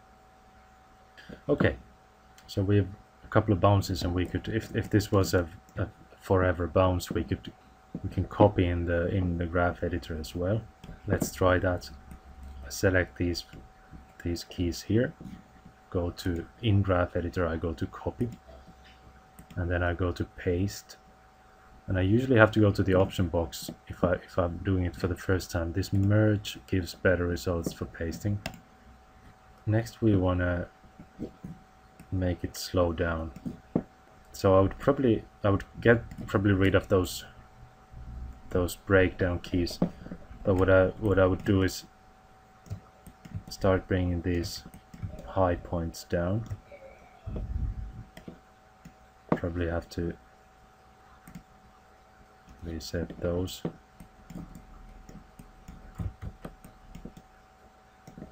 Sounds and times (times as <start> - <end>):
Speech: 1.5 - 1.8, 2.5 - 12.0, 12.6 - 13.6, 14.2 - 15.2, 15.9 - 18.4, 19.6 - 21.0, 21.9 - 28.5, 29.7 - 30.7, 32.1 - 33.4, 34.3 - 37.4, 38.5 - 41.9, 43.5 - 47.5, 49.4 - 50.2, 52.6 - 53.8.